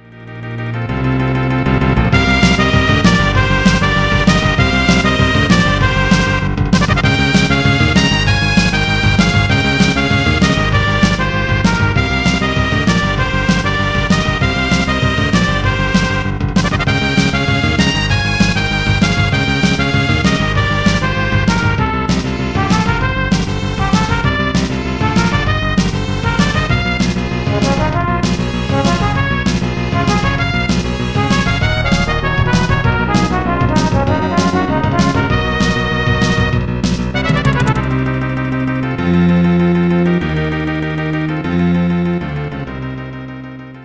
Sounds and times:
Music: 0.0s - 43.8s.

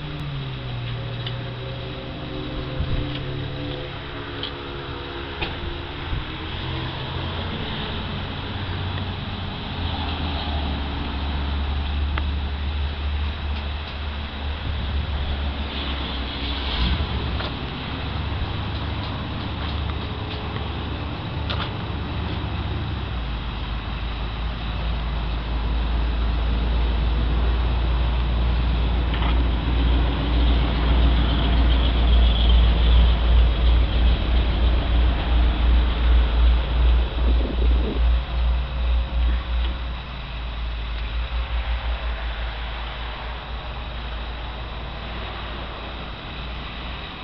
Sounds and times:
Vehicle: 0.0s - 47.2s.

